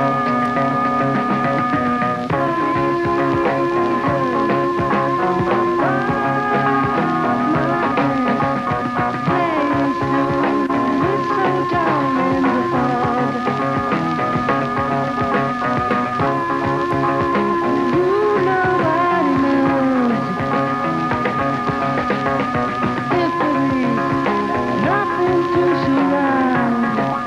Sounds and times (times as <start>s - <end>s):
Music: 0.0s - 27.2s.